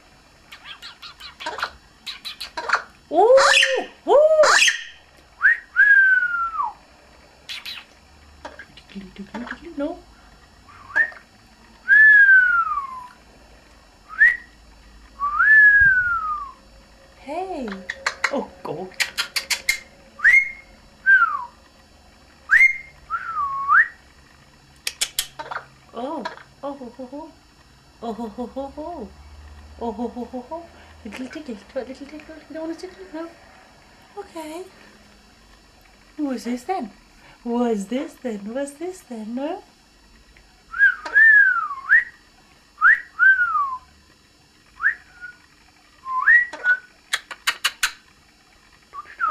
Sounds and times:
Whistling: 4.5 - 6.8, 10.8 - 11.2, 11.8 - 13.2, 14.1 - 14.6, 15.2 - 16.6, 20.2 - 21.6, 22.5 - 24.0, 40.7 - 42.2, 42.8 - 43.9, 44.8 - 46.9, 48.9 - 49.3
Speech: 8.9 - 10.1, 17.2 - 19.0, 25.9 - 27.4, 29.8 - 33.4, 34.2 - 34.7, 36.2 - 39.7.

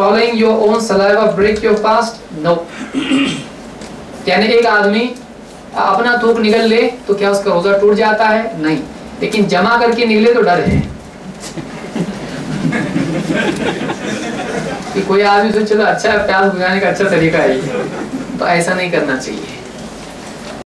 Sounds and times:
Speech: 0.0 - 2.7, 4.3 - 5.2, 5.8 - 10.9, 14.9 - 17.8, 18.4 - 19.7.

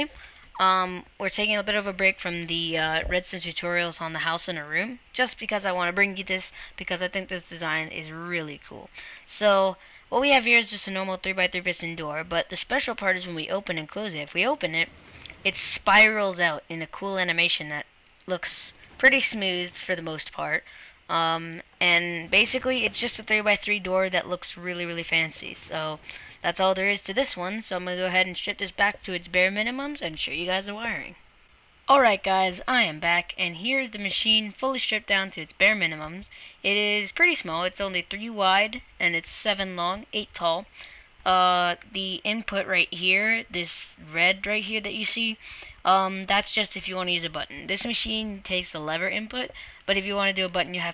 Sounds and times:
Speech: 0.0 - 31.2, 31.9 - 40.7, 41.3 - 50.9.

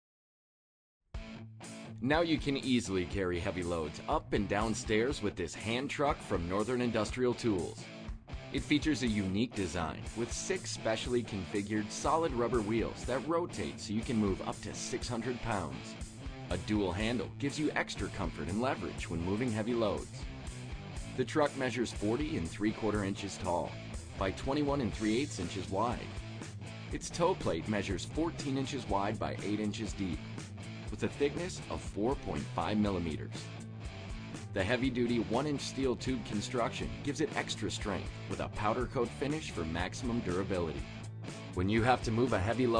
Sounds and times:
Music: 1.2 - 42.7
Speech: 2.0 - 7.8, 8.5 - 15.9, 16.5 - 20.2, 21.2 - 26.2, 26.9 - 30.2, 30.9 - 33.4, 34.6 - 40.9, 41.6 - 42.7.

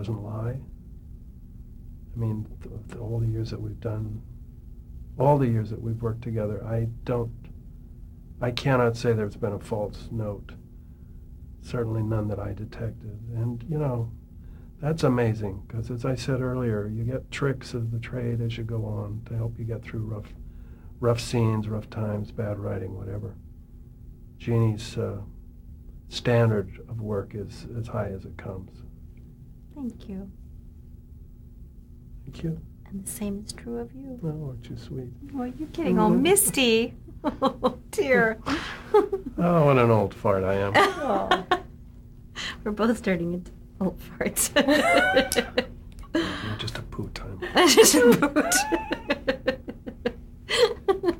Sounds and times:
Conversation: 0.0 - 50.8.

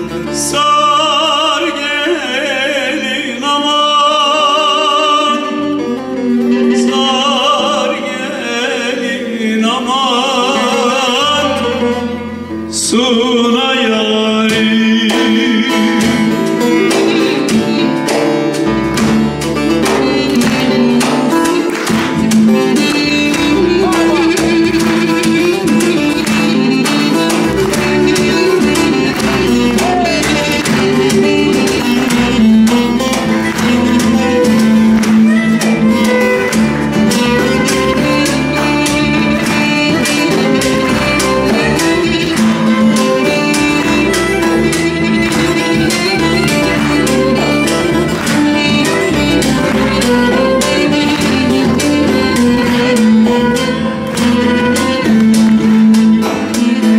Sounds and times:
Music: 0.0 - 56.9
Speech: 23.7 - 24.5.

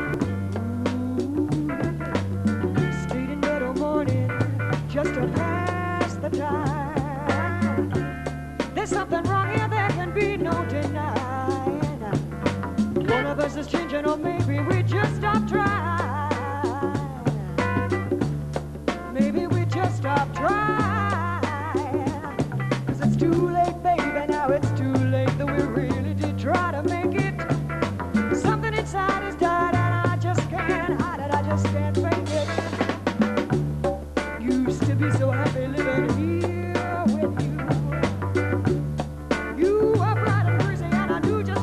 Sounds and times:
Blues: 0.0 - 41.6.

